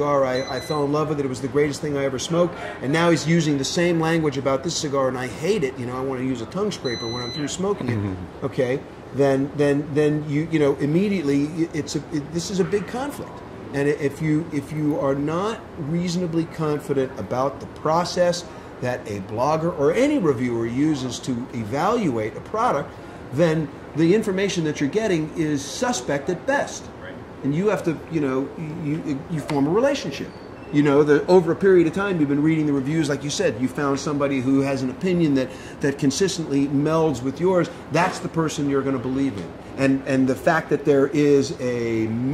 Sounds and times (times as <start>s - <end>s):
Speech: 0.0s - 42.3s.